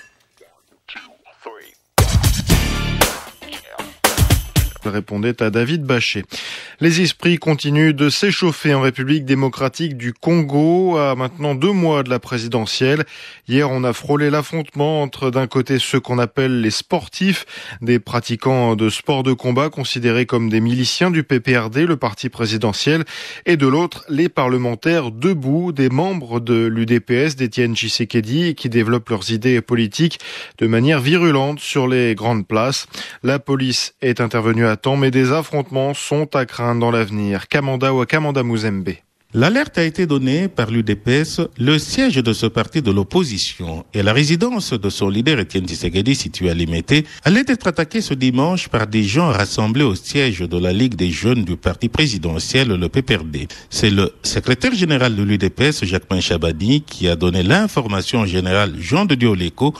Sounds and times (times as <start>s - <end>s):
Speech: 0.4s - 1.8s, 3.4s - 4.0s, 4.8s - 59.7s.